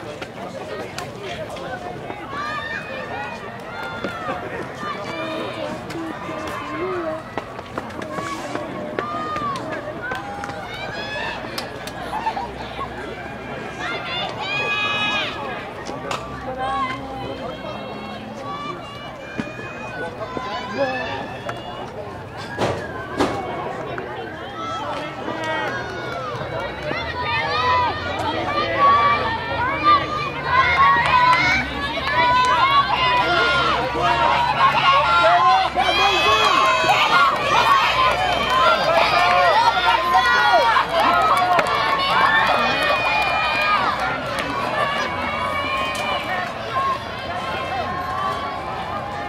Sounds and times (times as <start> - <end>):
Outside, urban or manmade: 0.0 - 49.2
Run: 0.0 - 49.2
Speech: 0.0 - 49.2.